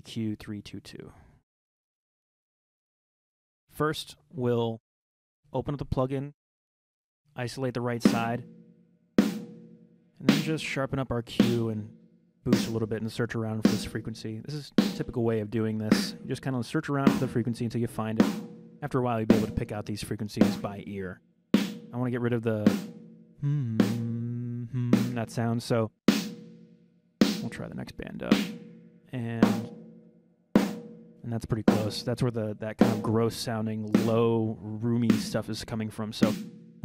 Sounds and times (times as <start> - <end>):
Speech: 0.0 - 1.3, 3.8 - 4.8, 5.5 - 6.4, 7.4 - 8.4, 10.2 - 11.9, 12.5 - 21.2, 22.0 - 22.8, 23.4 - 25.9, 27.4 - 28.4, 29.1 - 29.7, 31.2 - 36.8
Music: 8.0 - 20.7, 21.5 - 23.2, 23.8 - 24.1, 24.9 - 25.4, 26.1 - 27.7, 28.3 - 32.2, 32.8 - 34.3, 35.0 - 36.8.